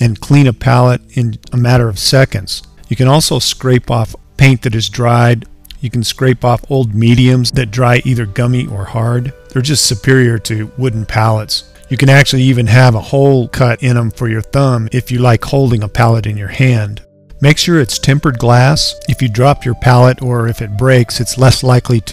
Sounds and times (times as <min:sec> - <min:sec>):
Music: 0:00.0 - 0:22.1
Speech: 0:00.0 - 0:22.1.